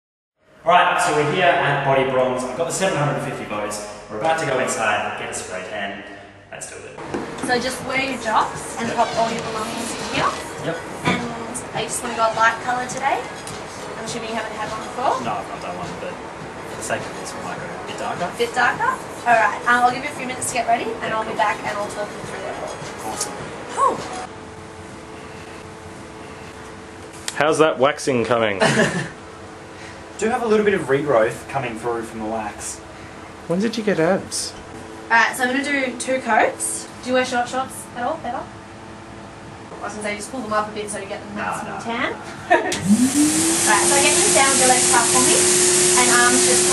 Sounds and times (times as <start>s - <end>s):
Speech: 0.7s - 6.0s, 27.4s - 28.6s.